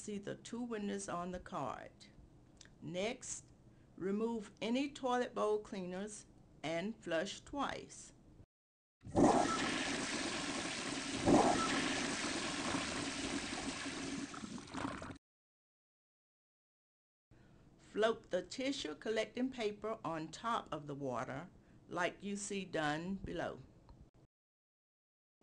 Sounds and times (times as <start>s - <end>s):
Speech: 0.0s - 2.1s, 2.8s - 8.2s, 17.9s - 23.7s
Water: 9.1s - 15.2s.